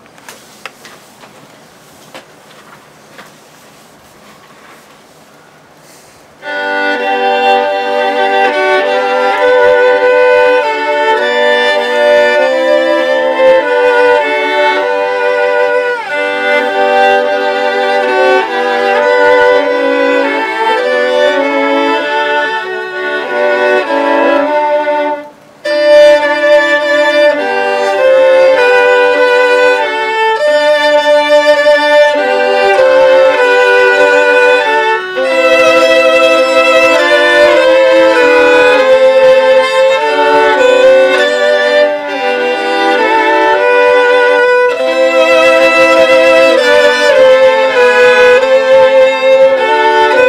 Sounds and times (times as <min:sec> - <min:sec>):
Violin, fiddle: 0:06.4 - 0:50.2.